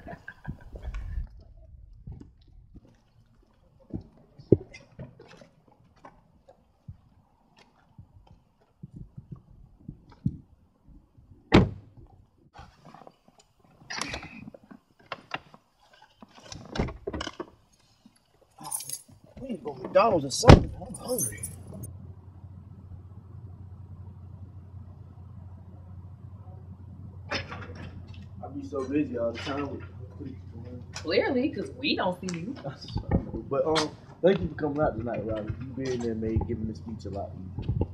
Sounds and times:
Outside, urban or manmade: 0.0s - 37.9s.

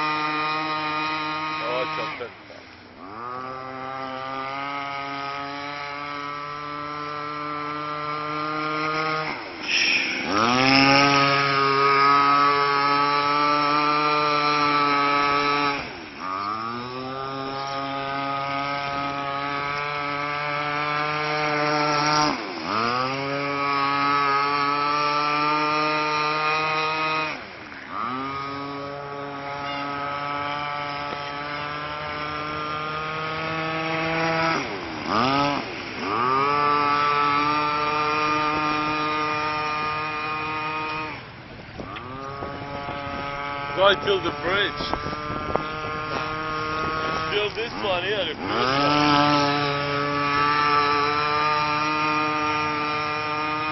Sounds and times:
Motorboat, speedboat: 0.0s - 53.7s.

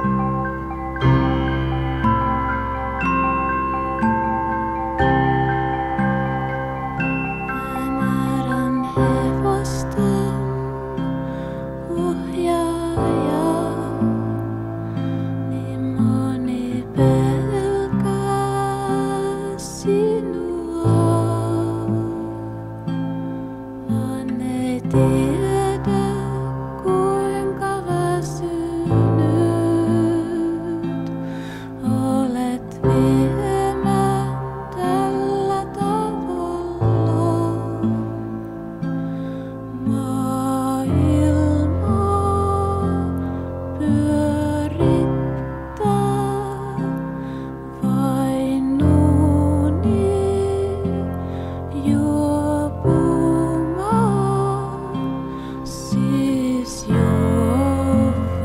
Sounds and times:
Marimba, xylophone: 0.0s - 9.6s
Glockenspiel: 0.0s - 58.4s.

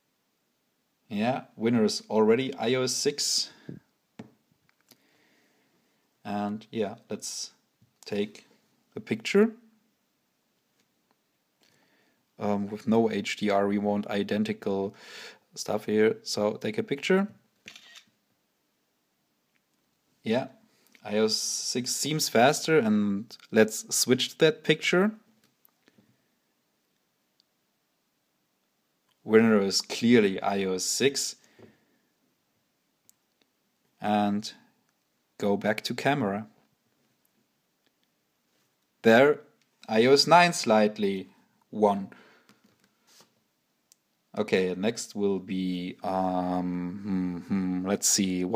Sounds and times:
Inside, small room: 0.0s - 48.5s
Speech: 1.1s - 3.8s, 6.2s - 9.7s, 12.4s - 15.0s, 15.6s - 17.4s, 20.2s - 25.3s, 29.2s - 31.4s, 34.0s - 34.7s, 35.4s - 36.6s, 39.0s - 42.2s, 44.3s - 48.5s.

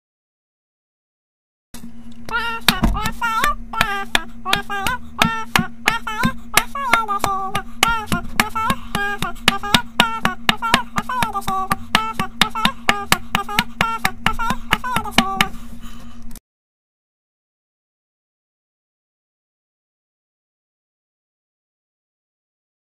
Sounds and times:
Music: 2.3s - 15.6s.

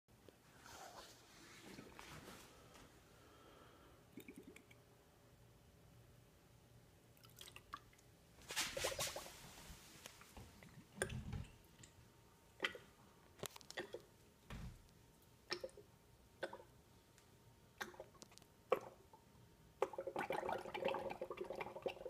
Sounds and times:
Inside, small room: 0.1s - 22.0s.

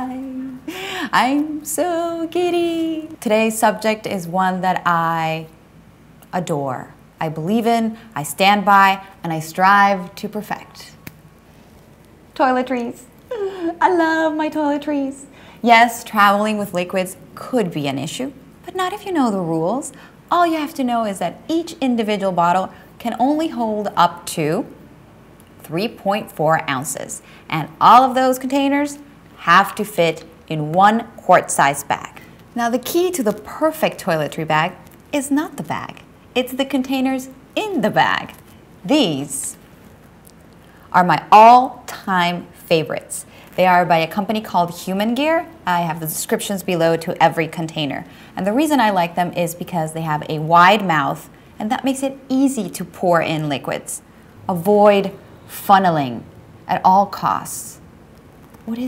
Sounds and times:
Speech: 0.0s - 5.5s, 6.3s - 11.0s, 12.4s - 24.7s, 25.6s - 39.6s, 41.0s - 57.8s.

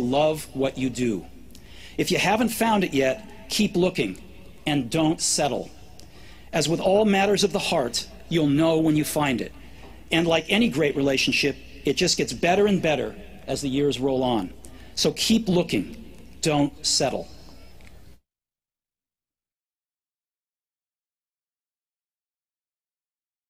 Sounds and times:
Male speech, man speaking: 0.0s - 1.3s, 2.0s - 5.8s, 6.5s - 17.4s.

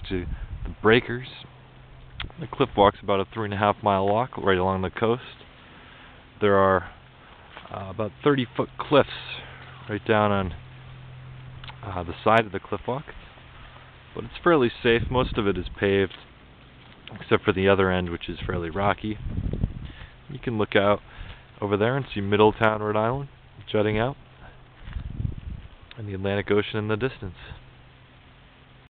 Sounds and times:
Speech: 0.0s - 1.5s, 2.2s - 5.4s, 6.4s - 7.0s, 7.6s - 10.6s, 11.7s - 13.2s, 14.2s - 16.3s, 17.1s - 19.2s, 20.3s - 21.0s, 21.6s - 24.2s, 26.0s - 27.6s.

